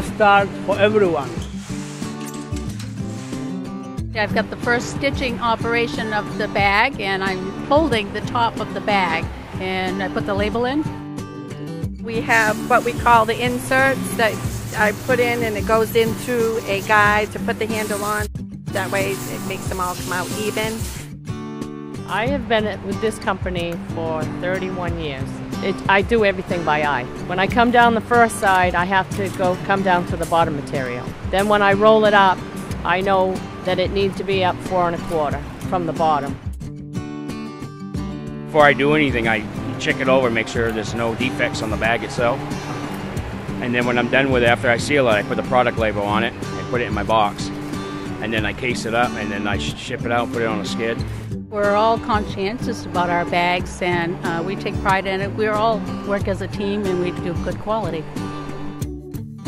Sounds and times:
Music: 0:00.0 - 0:59.4
Speech: 0:04.2 - 0:10.8, 0:12.1 - 0:20.8, 0:22.1 - 0:36.4, 0:38.6 - 0:42.4, 0:43.6 - 0:47.5, 0:48.2 - 0:51.0, 0:51.6 - 0:58.0.

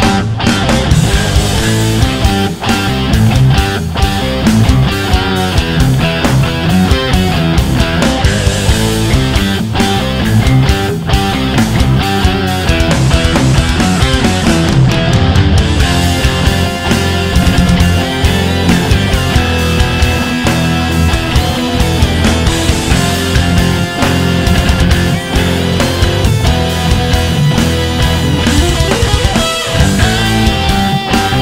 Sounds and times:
Progressive rock: 0:00.0 - 0:31.4
Rock and roll: 0:00.0 - 0:31.4.

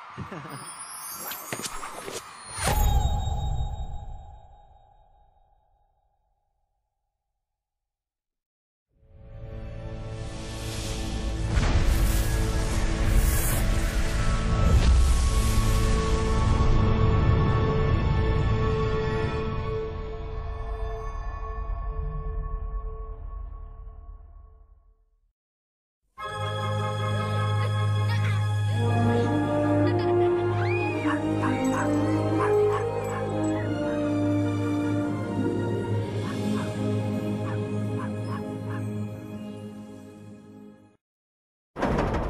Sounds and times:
Music: 0:09.0 - 0:25.0, 0:26.2 - 0:41.0.

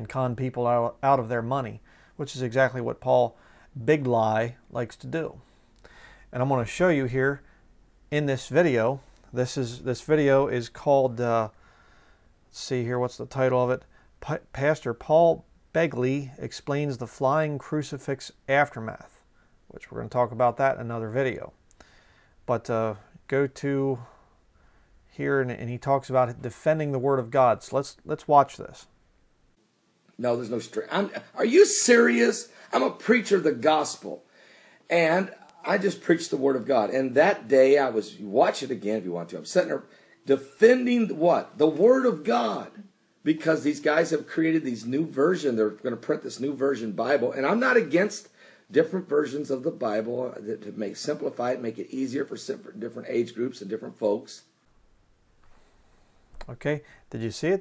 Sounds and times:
Speech: 0:00.0 - 0:05.4, 0:06.3 - 0:07.4, 0:08.1 - 0:11.6, 0:12.5 - 0:21.6, 0:22.5 - 0:24.2, 0:25.2 - 0:28.9, 0:30.2 - 0:34.2, 0:34.9 - 0:54.5, 0:56.4 - 0:57.6
Inside, small room: 0:00.0 - 0:57.6.

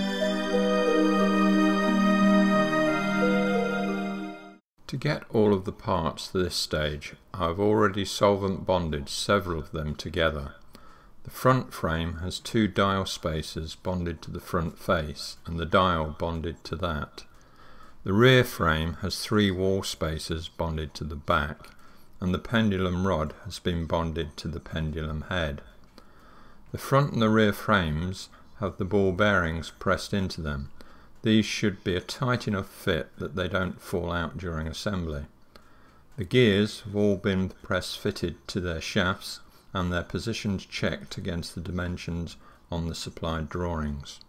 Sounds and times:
Speech: 0:04.8 - 0:10.6, 0:11.3 - 0:17.3, 0:18.0 - 0:25.8, 0:26.7 - 0:35.4, 0:36.2 - 0:44.2.

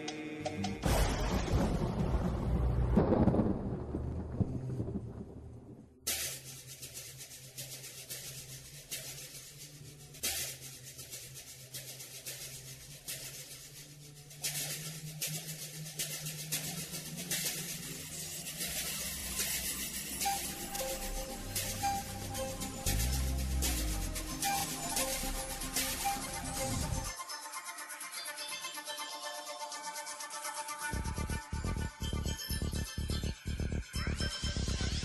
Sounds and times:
Music: 0:00.0 - 0:00.9, 0:06.1 - 0:35.0.

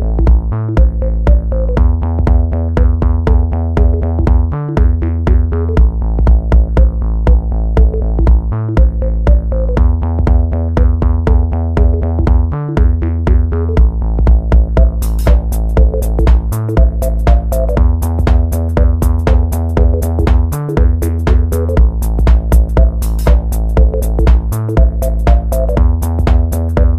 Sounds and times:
Drum machine: 0:00.0 - 0:26.9
Electronica: 0:00.0 - 0:26.9.

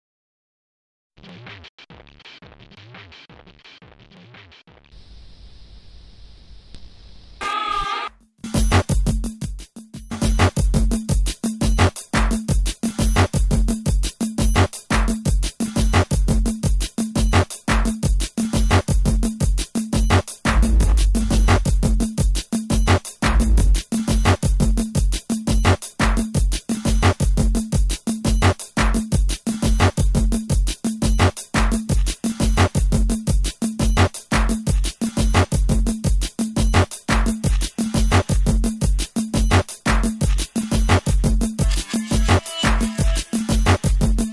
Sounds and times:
Music: 0:01.2 - 0:06.0, 0:07.4 - 0:44.3.

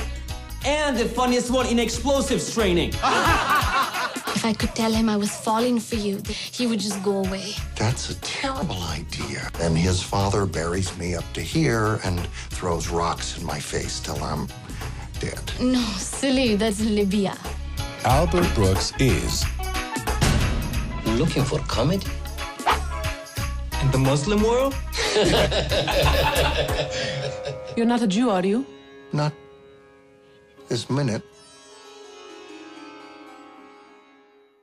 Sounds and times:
Harpsichord: 0:25.9 - 0:29.9.

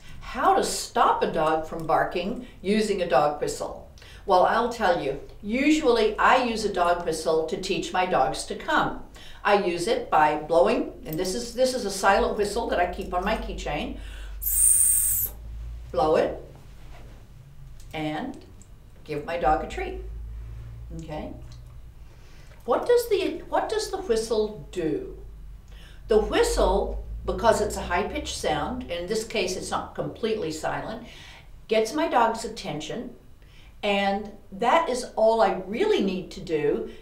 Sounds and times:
Speech: 0:00.2 - 0:14.0, 0:15.9 - 0:16.5, 0:17.9 - 0:20.1, 0:20.9 - 0:21.5, 0:22.7 - 0:25.2, 0:26.1 - 0:31.0, 0:31.7 - 0:33.2, 0:33.8 - 0:36.9.

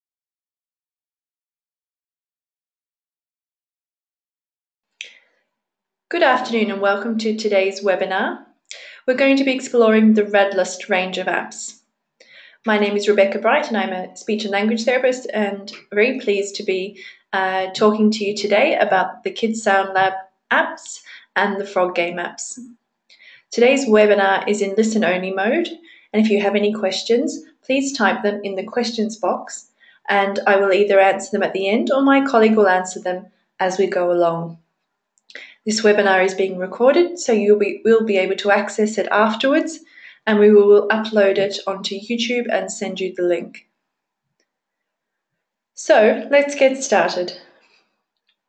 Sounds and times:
Speech: 0:06.1 - 0:11.7, 0:12.7 - 0:22.7, 0:23.4 - 0:34.5, 0:35.3 - 0:43.6, 0:45.8 - 0:47.4.

